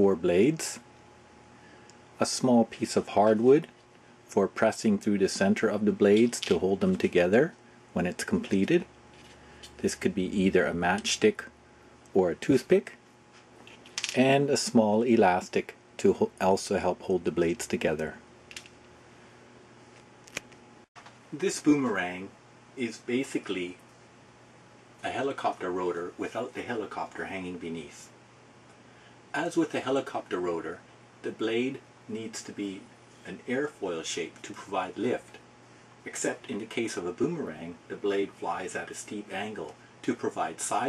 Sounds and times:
Speech: 0.0s - 0.8s, 2.2s - 8.9s, 9.8s - 11.5s, 12.1s - 13.0s, 14.1s - 18.2s, 21.3s - 23.8s, 25.0s - 28.2s, 29.3s - 35.4s, 36.0s - 40.8s.

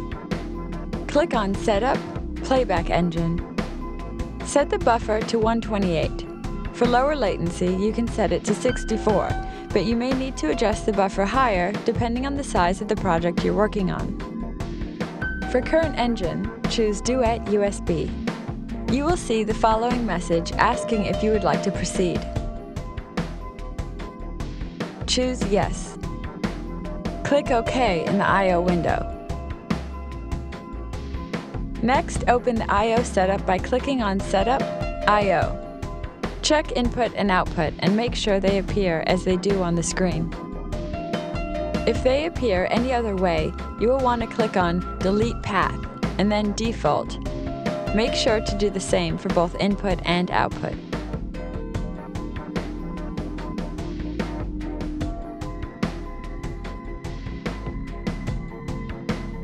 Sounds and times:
Music: 0.0s - 59.4s
Speech: 1.1s - 3.4s, 4.4s - 6.2s, 6.8s - 14.2s, 15.5s - 18.2s, 18.9s - 22.3s, 25.1s - 26.0s, 27.3s - 29.1s, 31.8s - 35.6s, 36.4s - 40.3s, 41.8s - 47.2s, 47.9s - 50.8s.

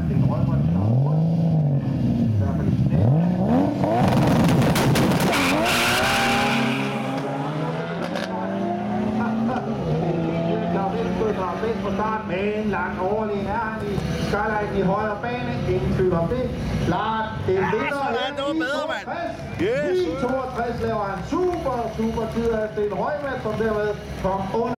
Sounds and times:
Speech: 10.7s - 24.7s.

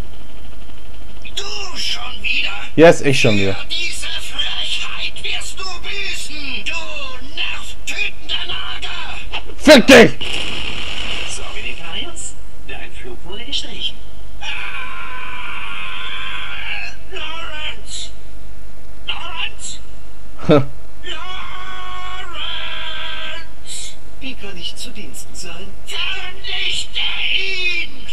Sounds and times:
Speech: 1.3s - 10.2s, 11.3s - 14.0s, 16.8s - 18.1s, 19.1s - 19.8s, 20.4s - 21.2s.

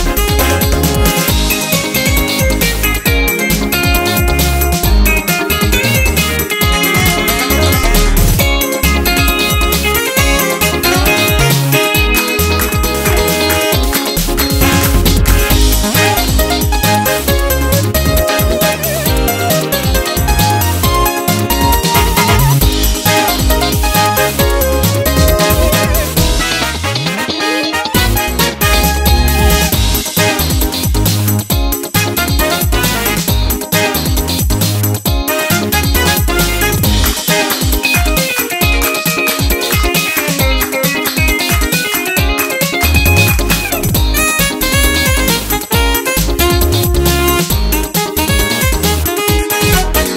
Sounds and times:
Video game music: 0.1s - 30.7s.

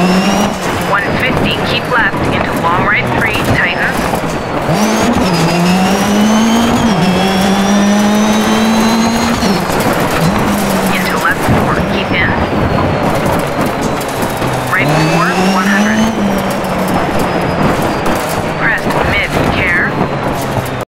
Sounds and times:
Speech: 0.9s - 4.0s, 10.9s - 12.5s, 14.7s - 16.1s, 18.6s - 20.0s.

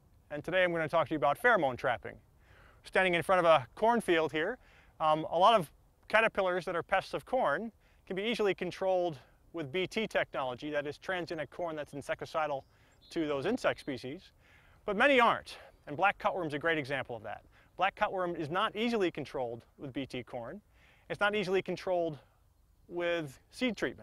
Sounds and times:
Speech: 0.3s - 2.2s, 2.8s - 14.3s, 14.9s - 22.3s, 22.9s - 24.0s.

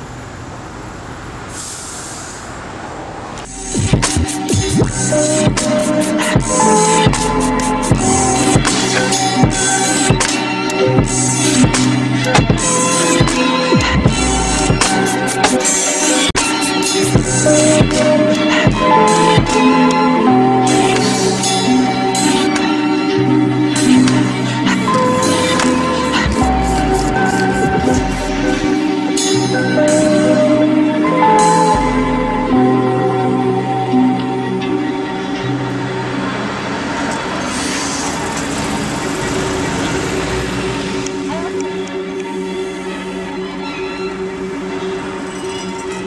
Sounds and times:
Music: 3.4s - 46.0s.

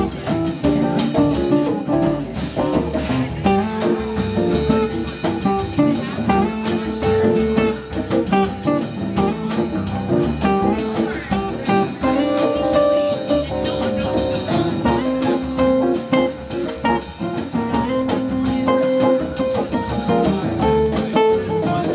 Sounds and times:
Jazz: 0.0s - 21.9s
Strum: 0.0s - 21.9s
Speech: 3.0s - 9.7s, 10.5s - 21.9s.

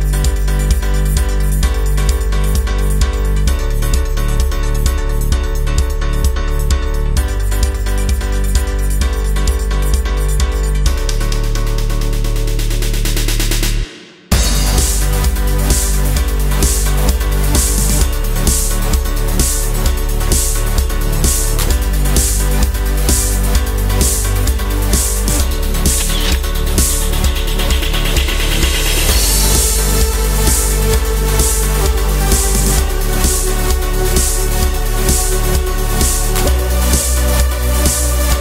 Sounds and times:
Music: 0.0s - 38.4s.

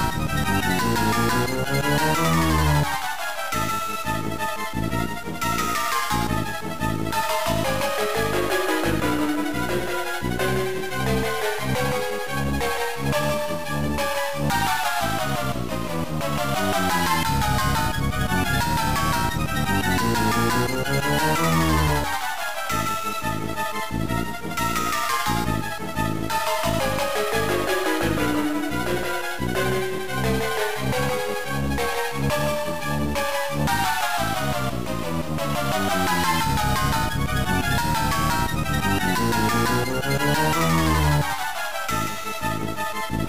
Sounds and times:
Video game music: 0.0s - 43.2s.

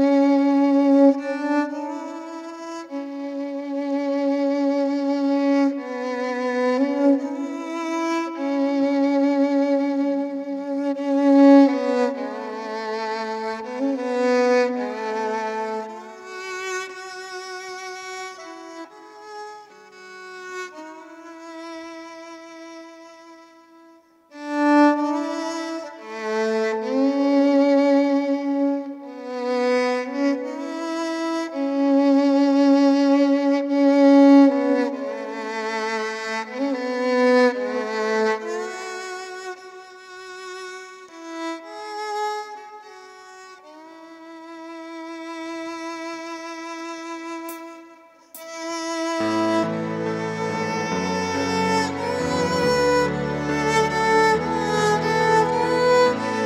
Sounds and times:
Violin, fiddle: 0.0s - 56.4s.

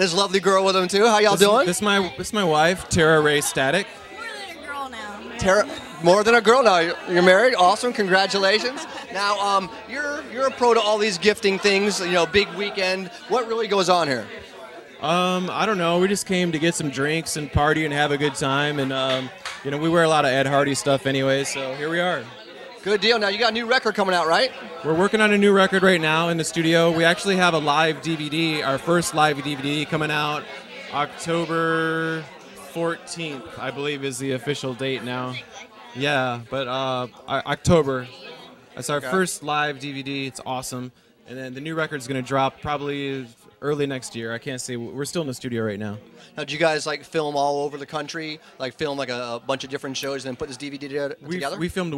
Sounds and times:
Speech: 4.5s - 51.9s.

